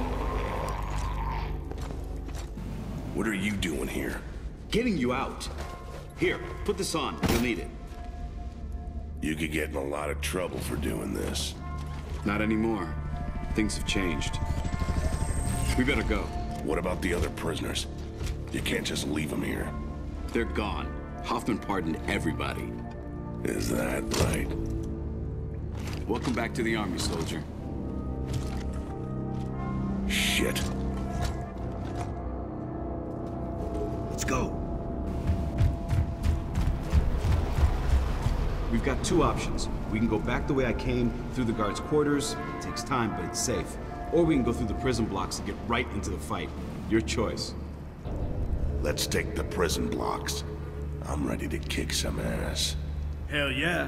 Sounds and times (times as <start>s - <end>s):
Music: 0.0s - 53.8s.